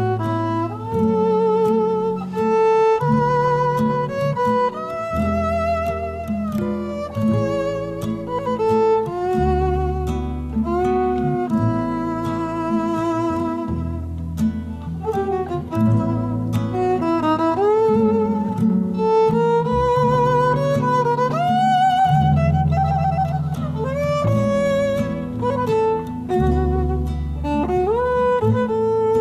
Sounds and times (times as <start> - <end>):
Violin, fiddle: 0.0 - 29.2.